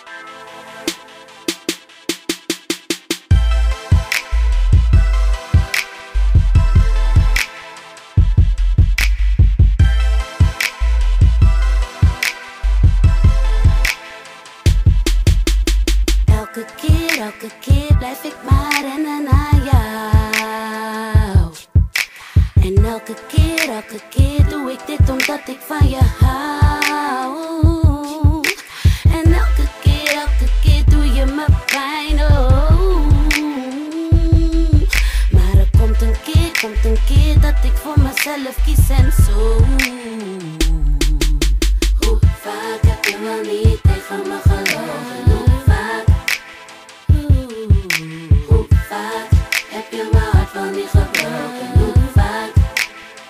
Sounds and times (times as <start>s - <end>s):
Music: 0.0s - 53.2s.